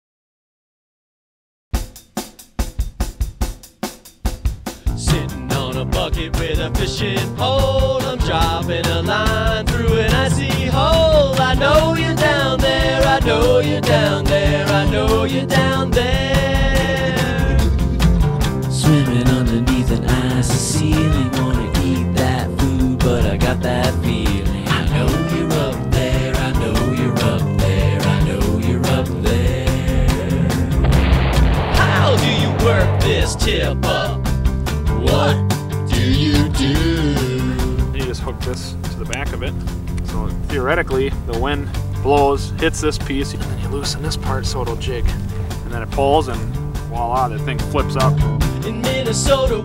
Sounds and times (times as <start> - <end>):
Music: 1.7 - 49.6.